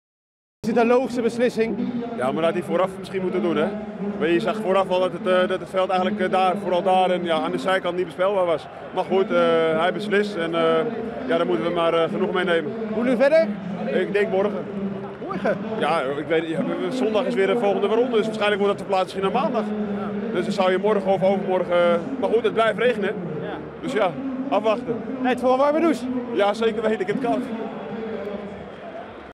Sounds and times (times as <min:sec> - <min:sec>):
Speech: 0:00.6 - 0:28.3.